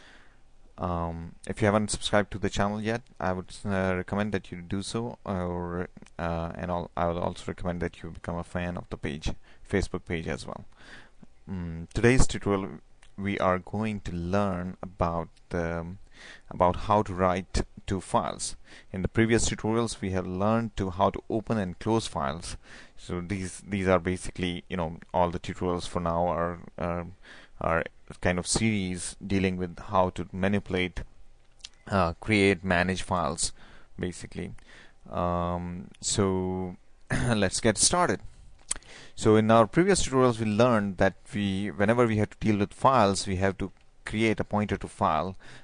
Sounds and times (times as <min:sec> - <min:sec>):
Speech: 0:00.8 - 0:10.7, 0:11.5 - 0:31.1, 0:31.8 - 0:38.2, 0:39.2 - 0:45.4.